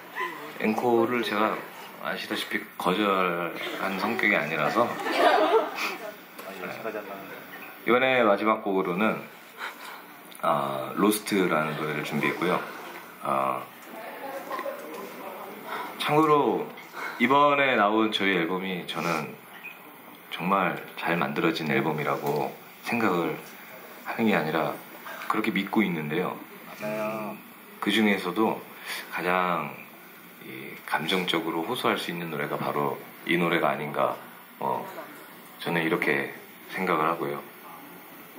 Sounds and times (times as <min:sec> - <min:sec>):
Speech: 0:20.4 - 0:23.5, 0:24.1 - 0:38.0.